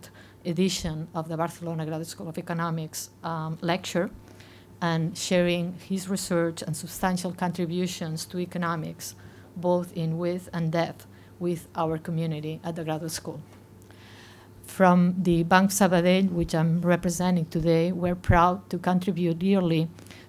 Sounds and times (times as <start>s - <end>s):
Speech: 0.0s - 4.2s, 4.8s - 13.4s, 14.7s - 20.0s.